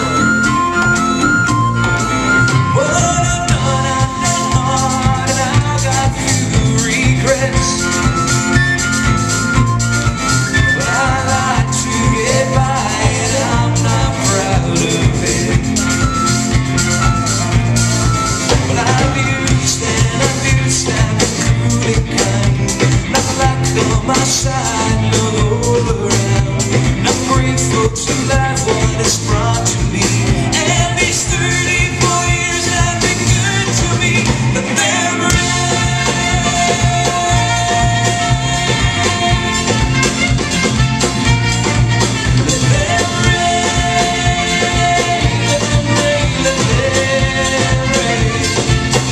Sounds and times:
Bass drum: 0:00.0 - 0:49.1
Drum kit: 0:00.0 - 0:49.1.

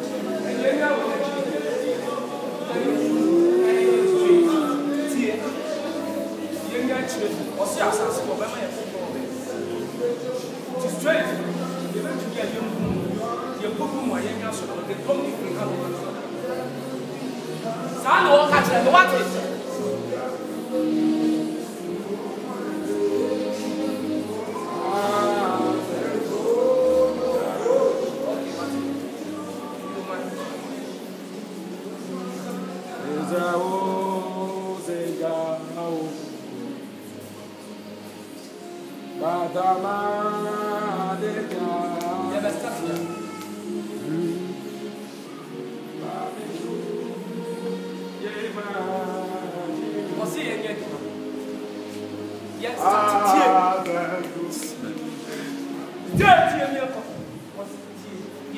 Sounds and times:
Choir: 0:00.0 - 0:58.5.

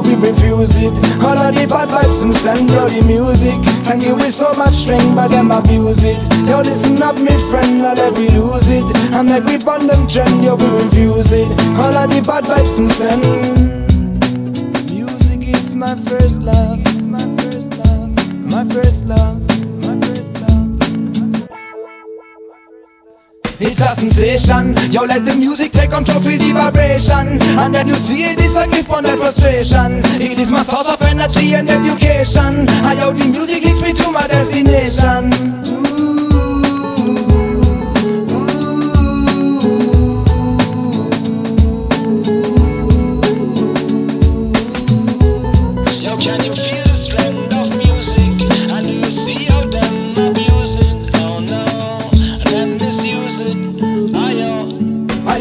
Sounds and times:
Background music: 0:00.0 - 0:55.4.

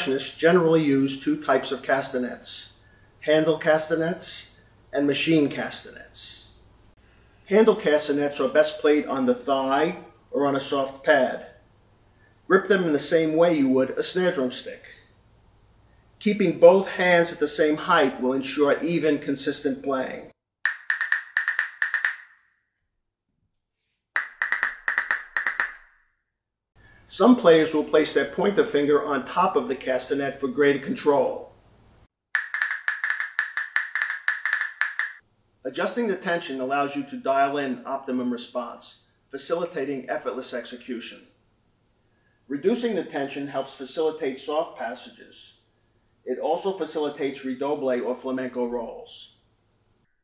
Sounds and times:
Speech: 0:00.0 - 0:06.6, 0:07.5 - 0:11.6, 0:12.5 - 0:15.0, 0:16.2 - 0:20.3, 0:27.1 - 0:31.5, 0:35.7 - 0:41.4, 0:42.5 - 0:45.6, 0:46.2 - 0:49.4.

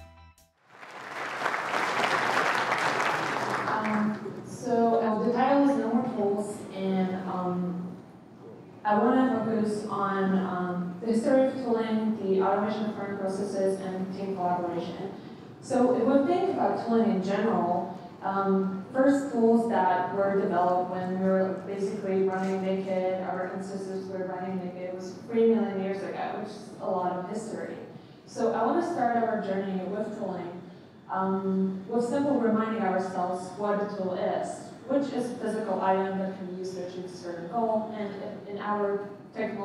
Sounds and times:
Speech: 0:03.6 - 0:39.6.

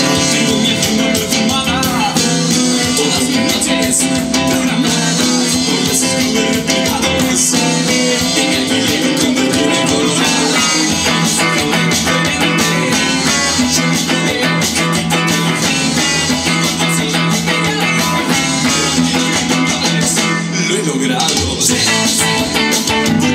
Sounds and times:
Guitar: 0:00.0 - 0:23.3.

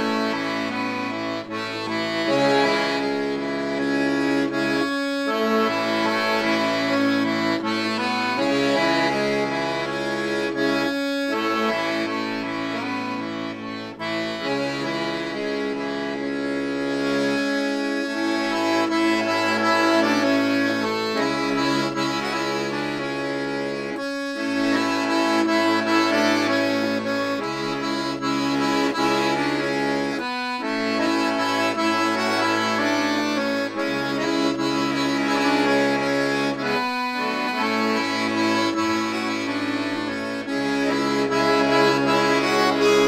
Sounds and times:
Accordion: 0:00.0 - 0:43.0.

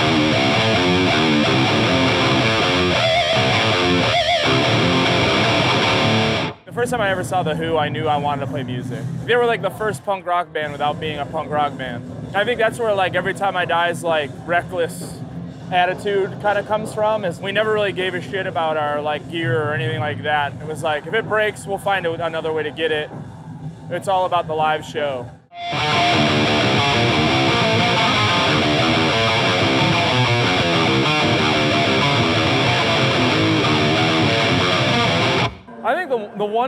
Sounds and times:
Speech: 0:06.7 - 0:23.1, 0:23.9 - 0:25.3, 0:35.7 - 0:36.6.

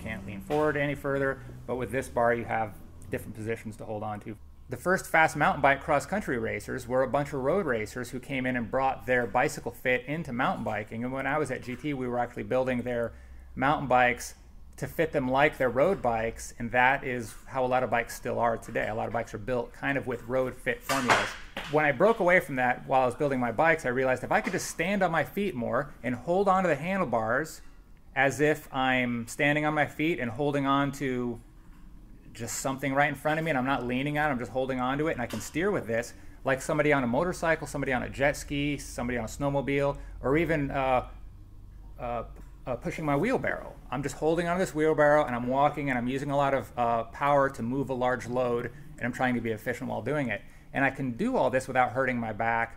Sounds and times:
Speech: 0:00.0 - 0:31.4, 0:32.3 - 0:41.2, 0:42.0 - 0:52.7.

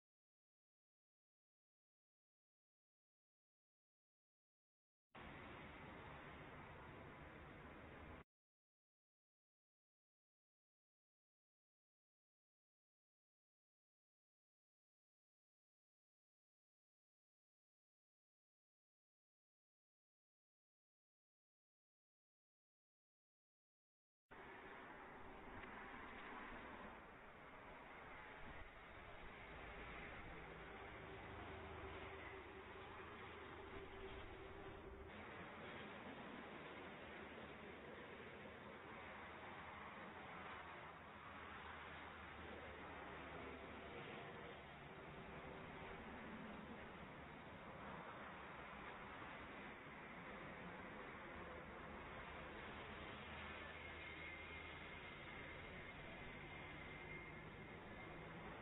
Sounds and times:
Vehicle: 0:05.2 - 0:08.3, 0:24.3 - 0:58.6.

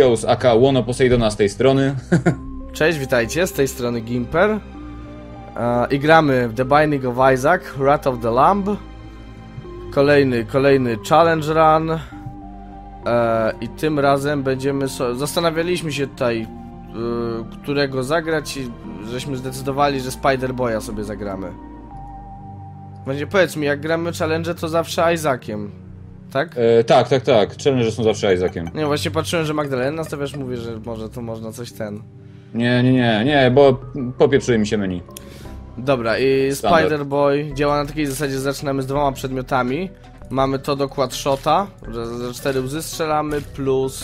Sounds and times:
Speech: 0:00.0 - 0:02.0, 0:02.8 - 0:04.6, 0:05.6 - 0:08.8, 0:09.9 - 0:12.1, 0:13.1 - 0:21.6, 0:23.1 - 0:25.8, 0:26.4 - 0:32.0, 0:32.6 - 0:35.1, 0:35.8 - 0:44.0
Music: 0:00.0 - 0:44.0.

